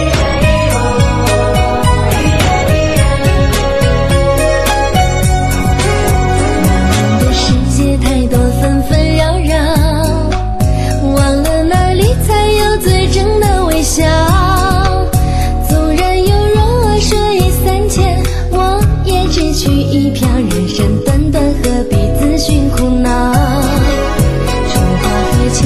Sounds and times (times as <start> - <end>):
Music: 0.0 - 25.6.